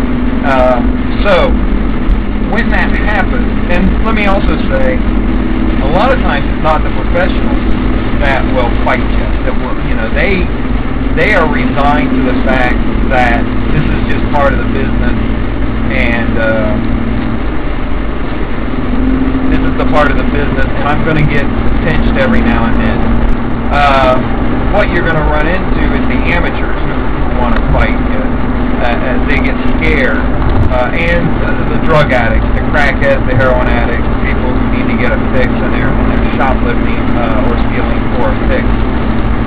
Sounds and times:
Car: 0.0 - 39.4
Outside, urban or manmade: 0.0 - 39.4
Speech: 0.4 - 1.6, 2.5 - 5.0, 5.8 - 7.6, 8.2 - 10.5, 11.2 - 15.2, 15.9 - 16.9, 19.5 - 23.0, 23.7 - 38.7.

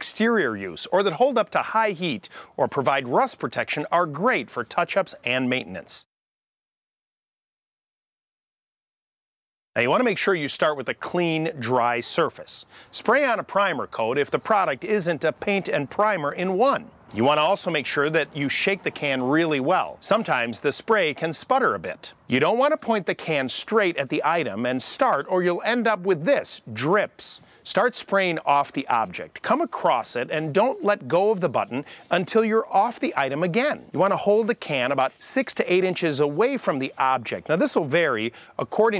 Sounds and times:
Speech: 0.0 - 6.1, 9.8 - 38.9.

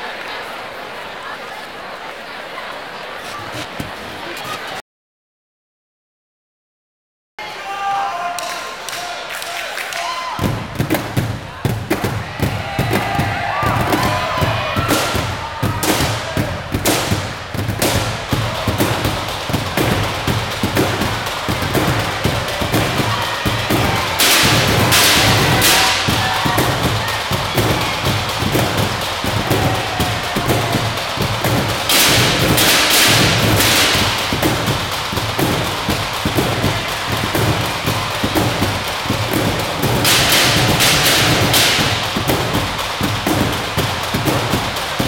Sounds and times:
Percussion: 8.4 - 45.0.

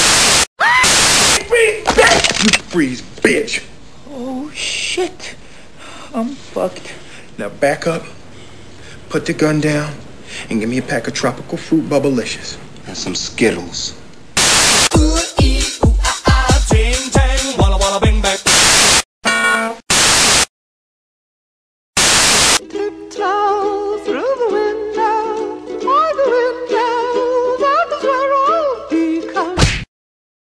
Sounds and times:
Music: 14.9 - 18.8, 22.6 - 29.6.

